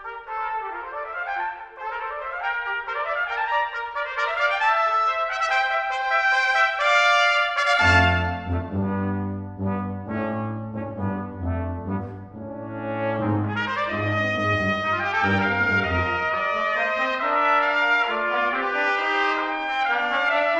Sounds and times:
French horn: 0.0s - 20.5s.

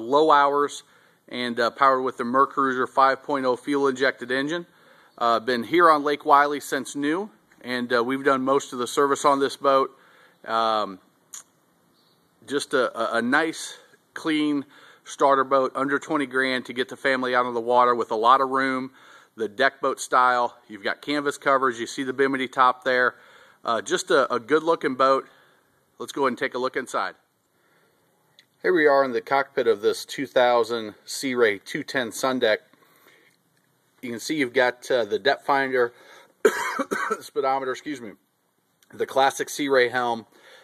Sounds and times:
Speech: 0.0s - 11.5s, 12.5s - 25.4s, 26.0s - 27.3s, 28.6s - 32.7s, 34.0s - 36.0s, 36.8s - 38.2s, 38.8s - 40.3s.

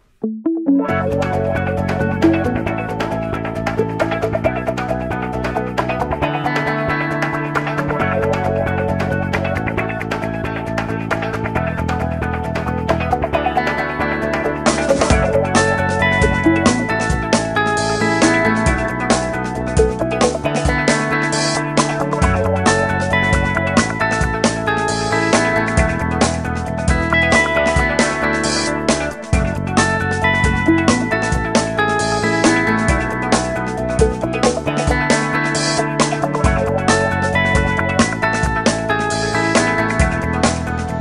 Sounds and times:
Music: 0.0s - 41.0s.

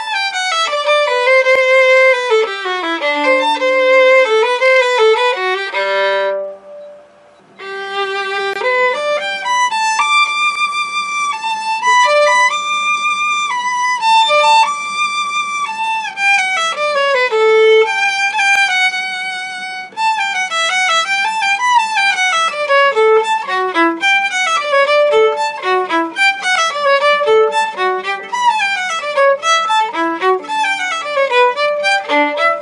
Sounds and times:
Violin, fiddle: 0.0s - 32.6s.

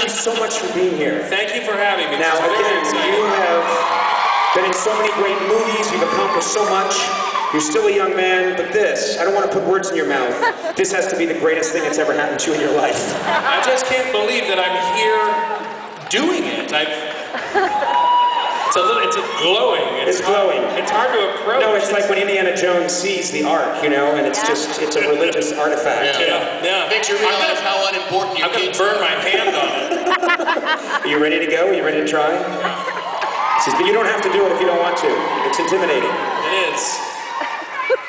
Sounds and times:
Speech: 0.0s - 3.8s, 4.6s - 15.4s, 18.7s - 29.9s.

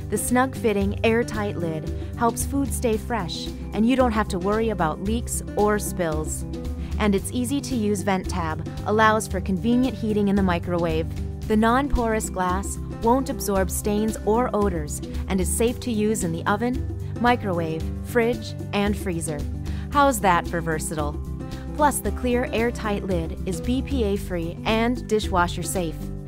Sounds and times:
Music: 0.0s - 26.2s
Speech: 0.1s - 6.4s, 7.0s - 21.2s, 21.8s - 26.0s.

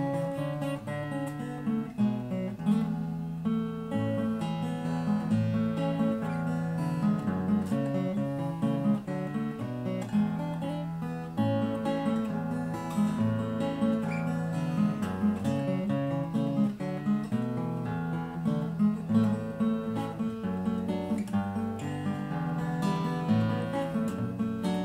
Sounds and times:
Acoustic guitar: 0.0s - 24.8s.

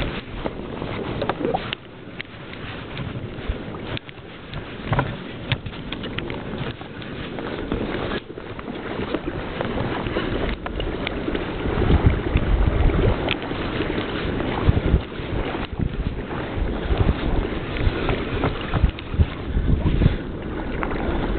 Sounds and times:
Boat, Water vehicle: 0.0s - 21.3s.

